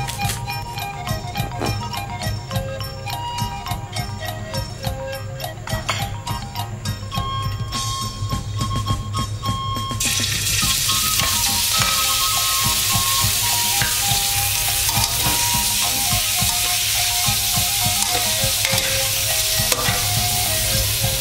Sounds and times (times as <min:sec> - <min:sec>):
Music: 0:00.0 - 0:21.2
Frying (food): 0:10.0 - 0:21.2
Sizzle: 0:10.0 - 0:21.2.